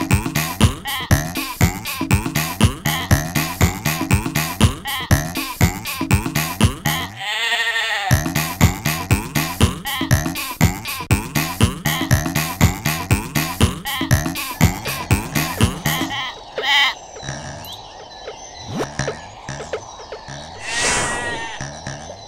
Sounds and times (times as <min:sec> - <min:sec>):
Bleat: 0:07.0 - 0:08.4.